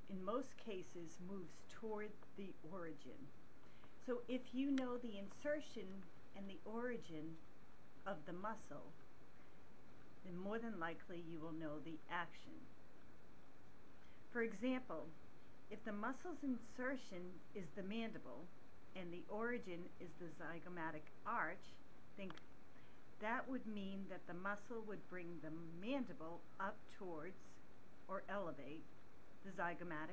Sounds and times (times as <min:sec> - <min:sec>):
Speech: 0:00.0 - 0:03.3, 0:04.0 - 0:07.4, 0:08.1 - 0:09.0, 0:10.2 - 0:12.7, 0:14.3 - 0:22.4, 0:23.2 - 0:30.1.